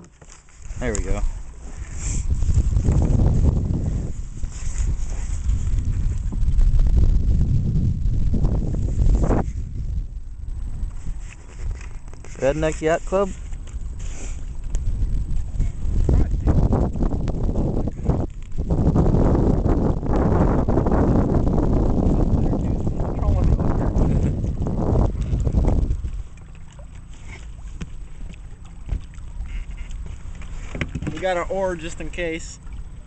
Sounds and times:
Boat, Water vehicle: 0:00.0 - 0:33.0
Speech: 0:00.8 - 0:01.3, 0:12.4 - 0:13.4, 0:22.4 - 0:23.9, 0:31.1 - 0:32.6.

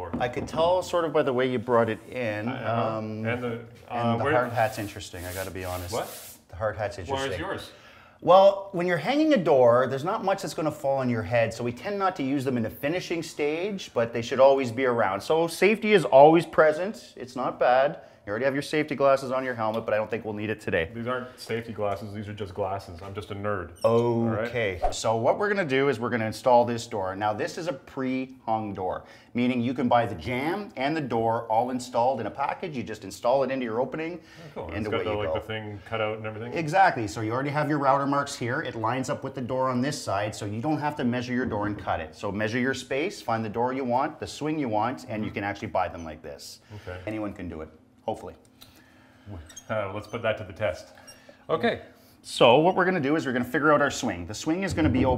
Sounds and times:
Speech: 0:00.0 - 0:48.4, 0:49.3 - 0:55.1.

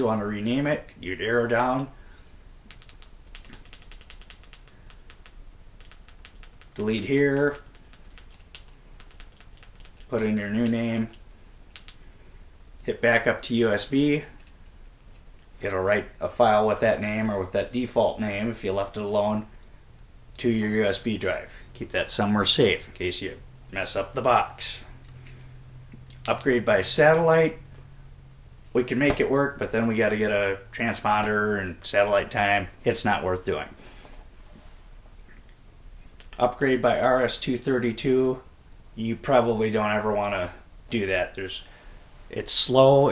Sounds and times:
Speech: 0:00.0 - 0:02.0, 0:06.8 - 0:07.7, 0:10.1 - 0:11.2, 0:12.8 - 0:14.4, 0:15.6 - 0:19.5, 0:20.4 - 0:24.9, 0:26.2 - 0:27.6, 0:28.8 - 0:33.8, 0:36.4 - 0:41.7, 0:42.3 - 0:43.1
Inside, small room: 0:00.0 - 0:43.1.

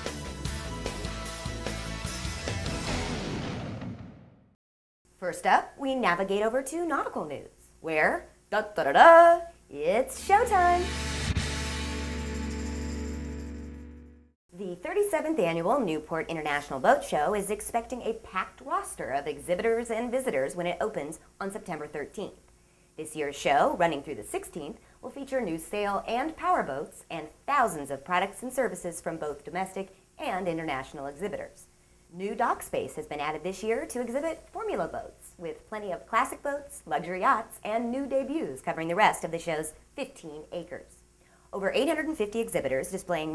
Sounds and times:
Speech: 0:05.2 - 0:10.9, 0:14.5 - 0:22.4, 0:23.0 - 0:41.0, 0:41.6 - 0:43.3.

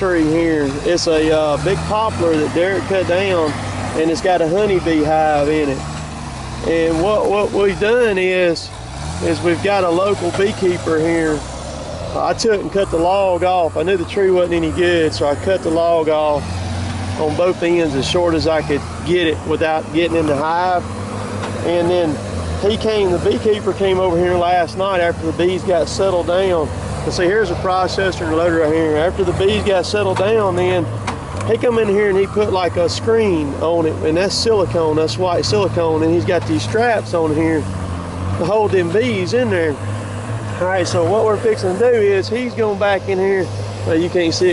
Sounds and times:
Speech: 0:00.0 - 0:05.8, 0:06.6 - 0:11.4, 0:12.1 - 0:16.5, 0:17.2 - 0:20.9, 0:21.6 - 0:37.7, 0:38.4 - 0:39.8, 0:40.6 - 0:44.5.

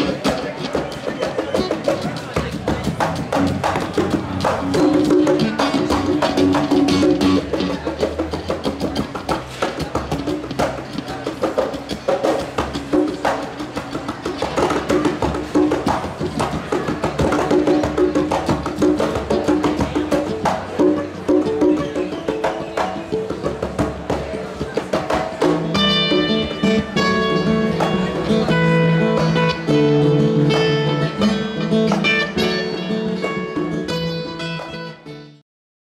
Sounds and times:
Drum: 0:00.0 - 0:34.8.

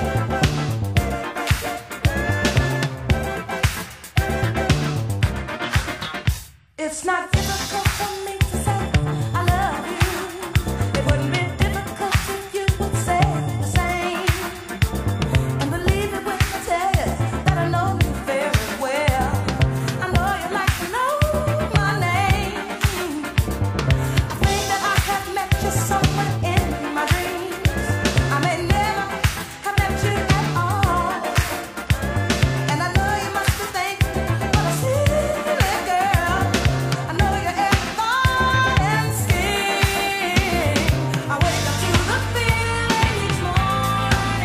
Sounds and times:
Funk: 0:00.0 - 0:06.6, 0:07.4 - 0:44.4
Dance music: 0:00.0 - 0:44.4
Disco: 0:00.0 - 0:44.4.

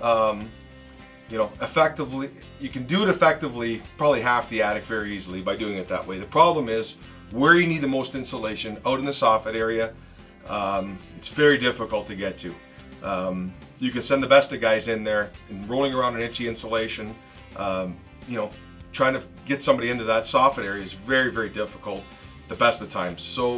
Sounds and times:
Speech: 0:00.0 - 0:00.6, 0:01.3 - 0:23.5
Music: 0:00.0 - 0:23.5.

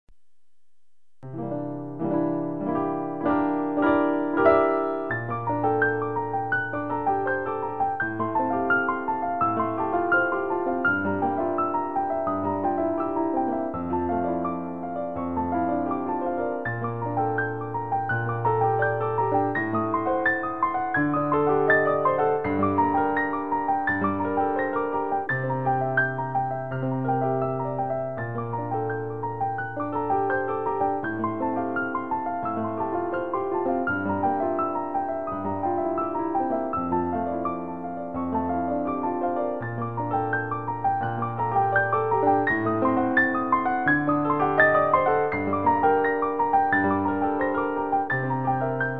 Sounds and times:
Electric piano: 0:01.2 - 0:48.9.

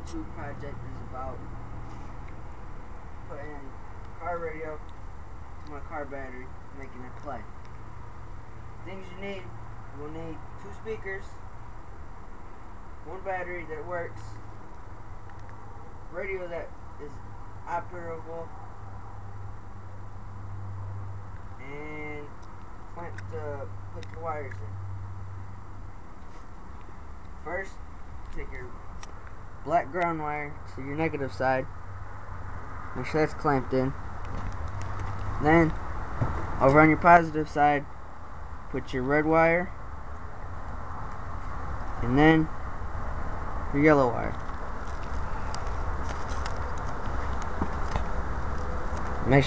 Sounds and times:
Speech: 0:00.0 - 0:01.4, 0:03.3 - 0:04.8, 0:05.7 - 0:07.5, 0:08.8 - 0:11.4, 0:13.1 - 0:14.4, 0:16.1 - 0:18.5, 0:21.6 - 0:22.3, 0:23.0 - 0:24.7, 0:27.4 - 0:27.8, 0:28.4 - 0:28.8, 0:29.7 - 0:31.7, 0:33.0 - 0:34.0, 0:35.4 - 0:35.8, 0:36.6 - 0:37.9, 0:38.7 - 0:39.8, 0:42.0 - 0:42.5, 0:43.7 - 0:44.4, 0:49.2 - 0:49.4.

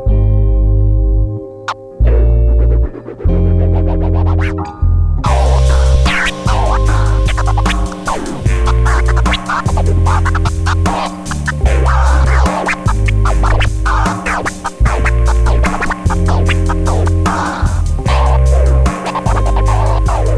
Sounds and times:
Scratching (performance technique): 0:01.7 - 0:20.3.

